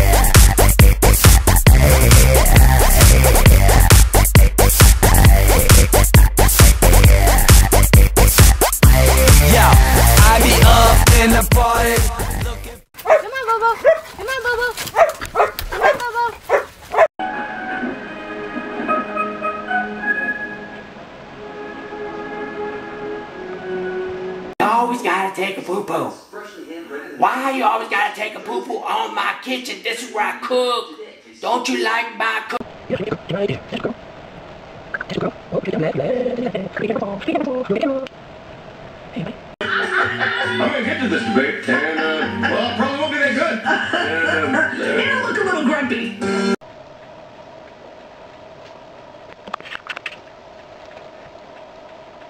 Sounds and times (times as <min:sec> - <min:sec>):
Speech: 0:13.2 - 0:14.8, 0:24.6 - 0:34.0, 0:35.1 - 0:38.1.